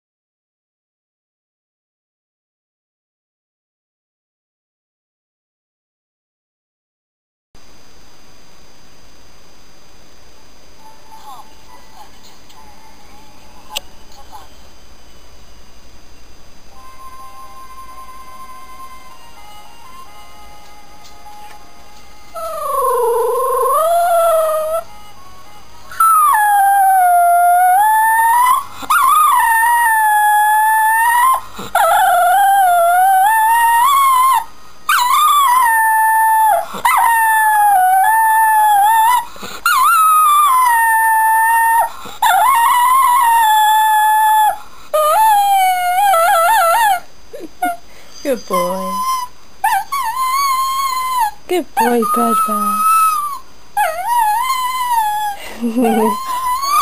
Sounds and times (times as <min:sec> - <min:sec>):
Howl: 0:22.3 - 0:25.1, 0:25.9 - 0:47.8, 0:48.5 - 0:56.8.